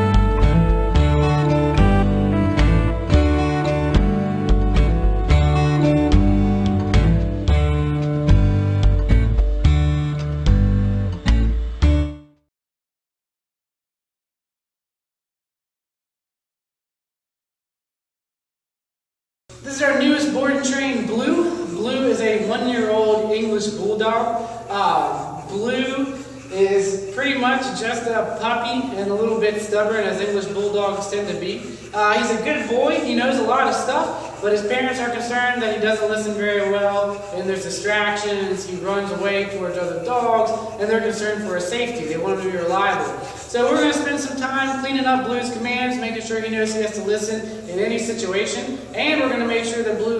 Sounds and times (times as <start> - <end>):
Speech: 19.6 - 50.1.